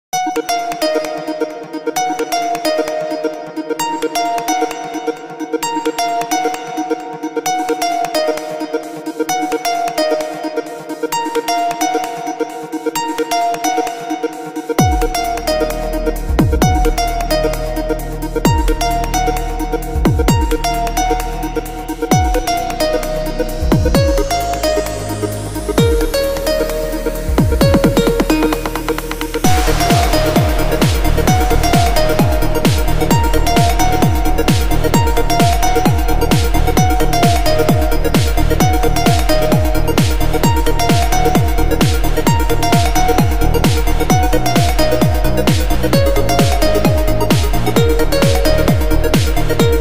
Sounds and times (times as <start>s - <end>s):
Electronica: 0.2s - 49.8s.